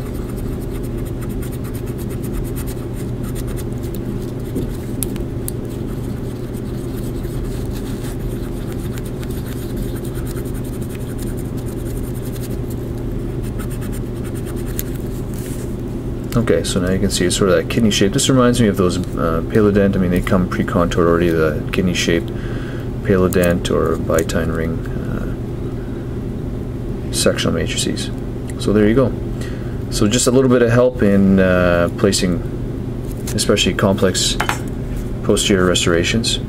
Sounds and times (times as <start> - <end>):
Speech: 16.4 - 22.3, 23.0 - 25.4, 27.1 - 29.2, 29.9 - 32.5, 33.3 - 34.5, 35.2 - 36.4.